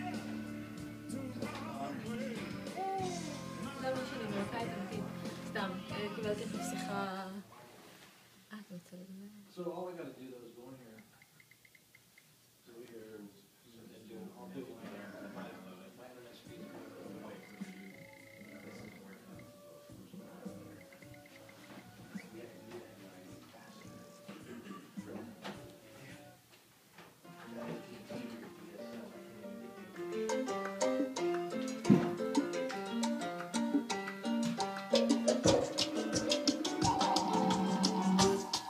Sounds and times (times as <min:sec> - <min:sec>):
Music: 0:00.0 - 0:07.3, 0:16.3 - 0:26.4, 0:27.2 - 0:38.6.